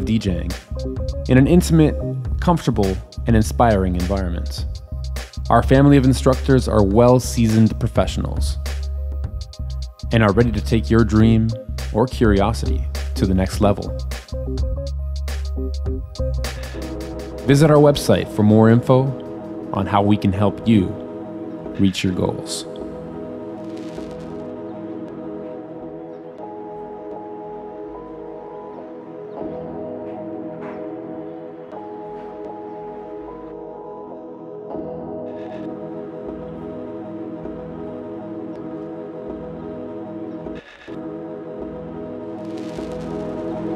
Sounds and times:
Speech: 0:00.0 - 0:00.6, 0:01.3 - 0:04.7, 0:05.5 - 0:08.7, 0:10.1 - 0:14.0, 0:17.5 - 0:21.0, 0:21.8 - 0:22.8
Electronic music: 0:00.0 - 0:43.7.

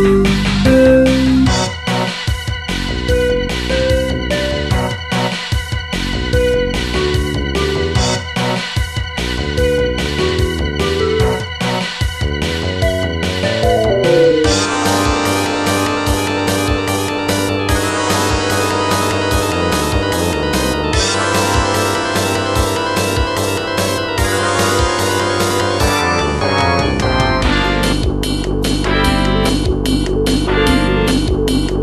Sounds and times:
Music: 0:00.0 - 0:31.8.

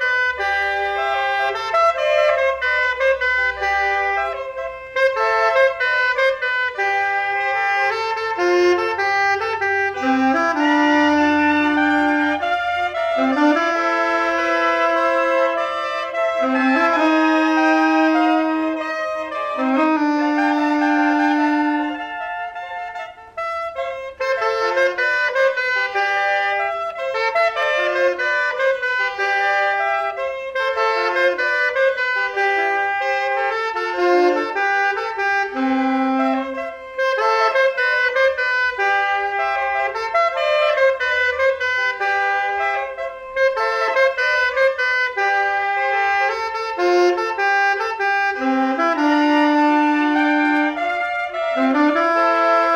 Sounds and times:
Saxophone: 0:00.0 - 0:52.7.

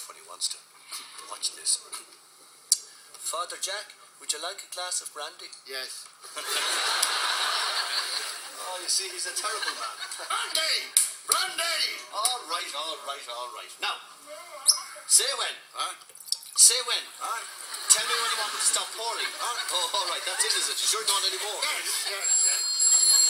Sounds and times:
Speech: 0:16.6 - 0:22.6.

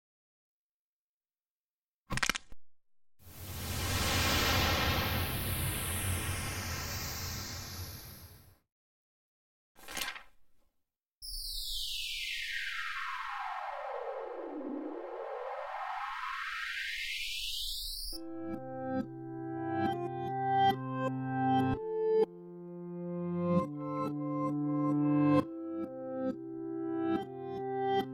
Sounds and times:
Sound effect: 0:03.2 - 0:08.6, 0:11.2 - 0:18.3
Music: 0:18.1 - 0:28.1.

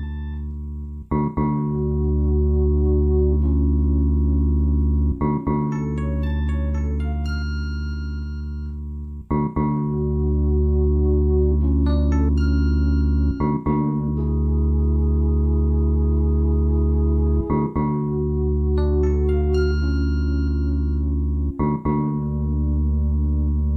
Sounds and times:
Electric piano: 0:00.0 - 0:23.7
Glockenspiel: 0:05.7 - 0:08.8, 0:11.9 - 0:14.0, 0:18.8 - 0:21.8.

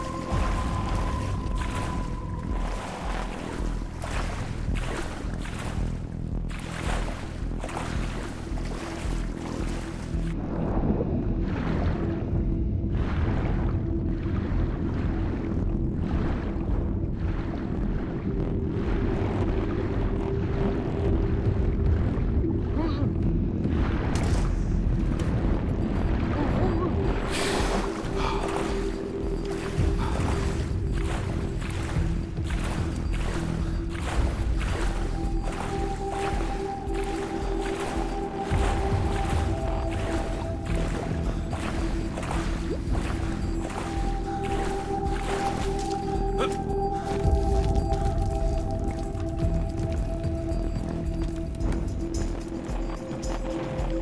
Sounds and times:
Music: 0:00.0 - 0:54.0
Outside, rural or natural: 0:00.0 - 0:54.0.

